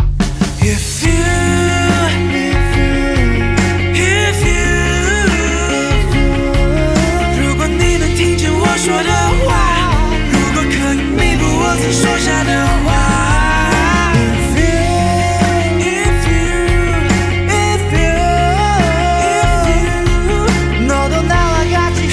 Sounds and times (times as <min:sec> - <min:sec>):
Grunge: 0:00.0 - 0:22.1.